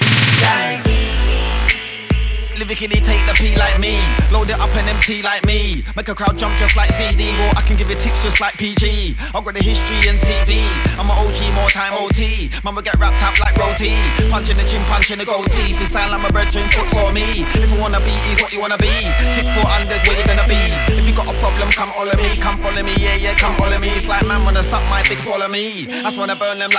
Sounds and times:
Music: 0:00.0 - 0:26.7
Rapping: 0:00.2 - 0:01.4, 0:02.6 - 0:26.7.

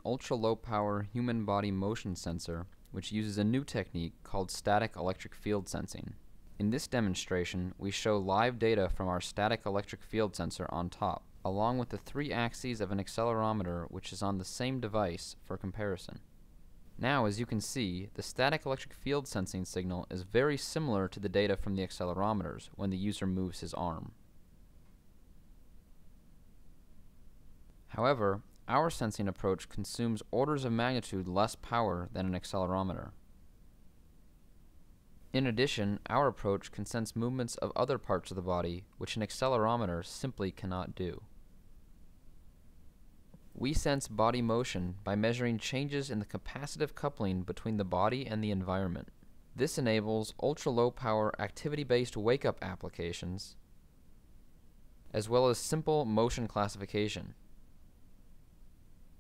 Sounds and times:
Speech: 0:00.0 - 0:16.3, 0:17.0 - 0:24.2, 0:27.9 - 0:33.2, 0:35.3 - 0:41.3, 0:43.6 - 0:53.6, 0:55.1 - 0:57.4.

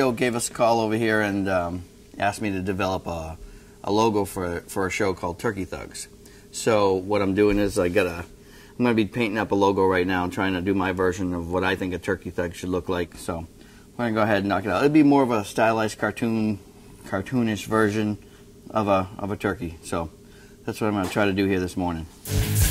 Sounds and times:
Speech: 0:00.0 - 0:22.1.

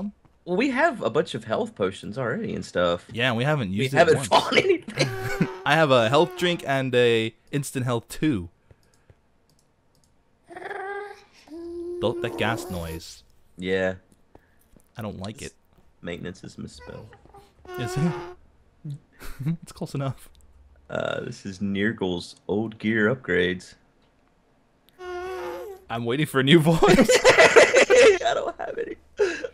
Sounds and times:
Speech: 0:00.0 - 0:08.5, 0:12.0 - 0:14.0, 0:15.0 - 0:15.5, 0:17.8 - 0:18.2, 0:18.9 - 0:20.3, 0:20.9 - 0:23.8, 0:25.9 - 0:27.1.

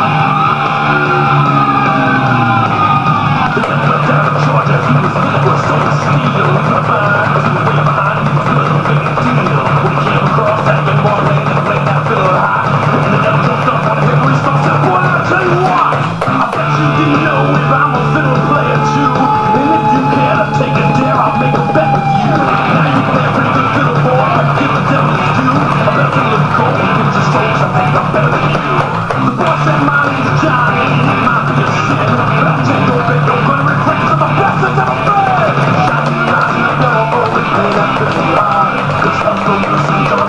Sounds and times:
Electric guitar: 0:00.0 - 0:40.2.

